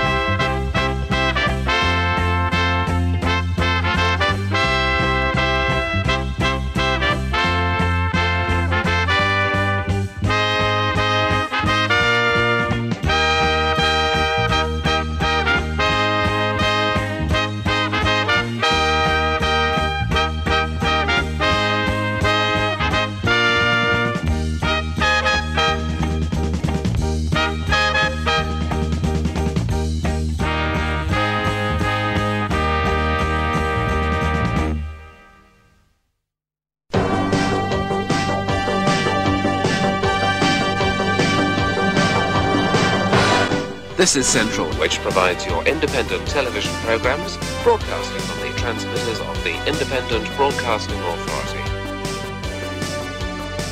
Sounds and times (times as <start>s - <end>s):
Music: 0.0s - 36.3s, 36.9s - 53.7s.